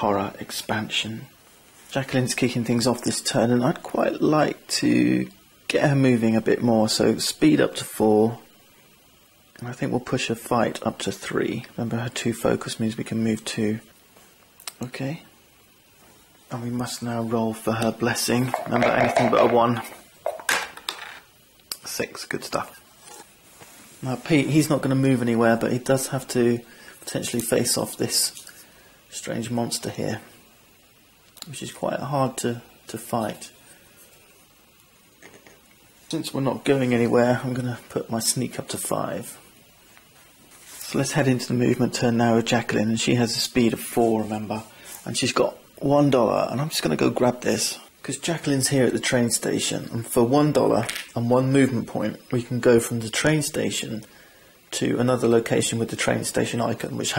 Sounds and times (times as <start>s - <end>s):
Speech: 0.0s - 8.5s, 9.6s - 13.9s, 14.6s - 15.3s, 16.5s - 20.0s, 21.7s - 22.9s, 24.0s - 28.4s, 29.1s - 30.4s, 31.4s - 33.6s, 36.1s - 39.5s, 40.8s - 54.1s, 54.7s - 57.1s
Inside, small room: 0.0s - 57.1s.